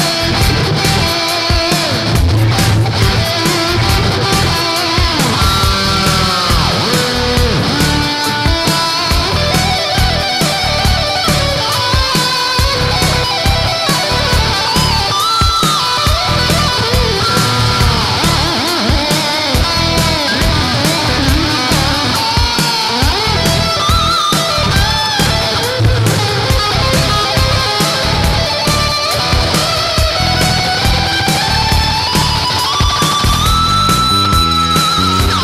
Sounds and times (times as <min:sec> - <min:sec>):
Electric guitar: 0:00.0 - 0:35.4.